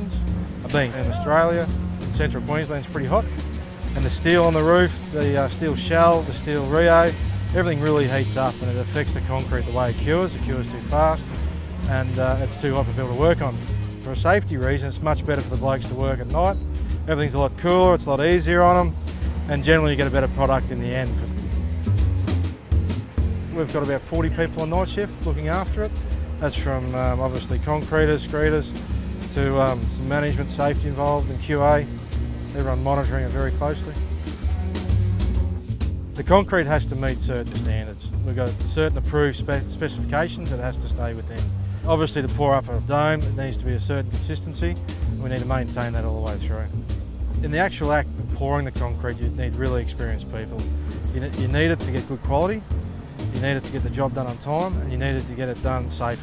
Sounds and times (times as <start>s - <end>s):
Speech: 0.0s - 3.4s, 4.0s - 11.3s, 11.9s - 21.3s, 23.5s - 31.9s, 32.5s - 34.0s, 36.2s - 46.7s, 47.4s - 52.6s, 53.3s - 56.2s
Music: 0.0s - 56.2s.